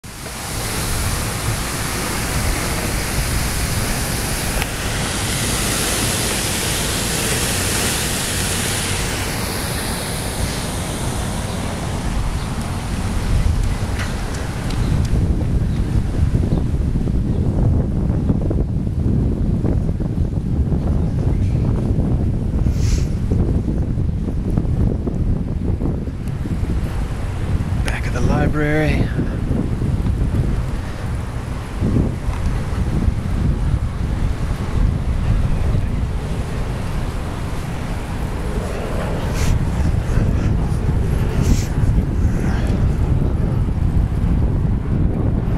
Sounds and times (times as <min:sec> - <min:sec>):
Outside, urban or manmade: 0:00.0 - 0:45.5.